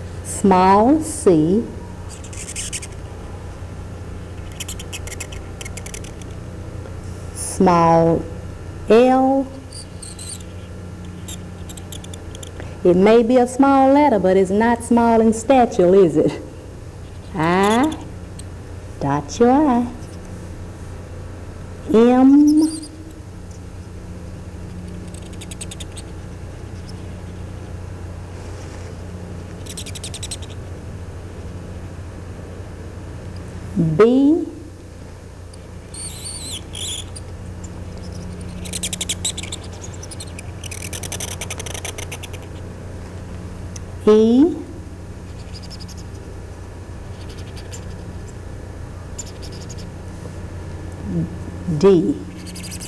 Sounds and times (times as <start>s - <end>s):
Speech: 0.3s - 1.8s, 7.4s - 9.6s, 12.8s - 16.5s, 17.4s - 18.1s, 19.0s - 20.0s, 21.9s - 22.8s, 33.8s - 34.7s, 44.1s - 44.8s, 51.0s - 52.3s.